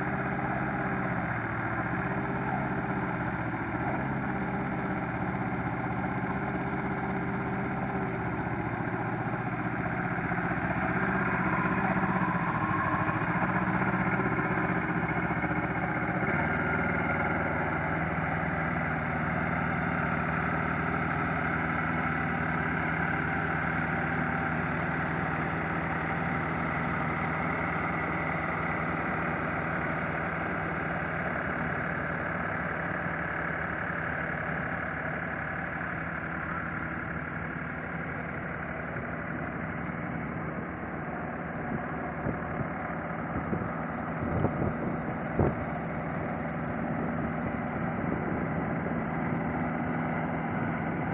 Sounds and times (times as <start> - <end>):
Vehicle: 0.0 - 51.1.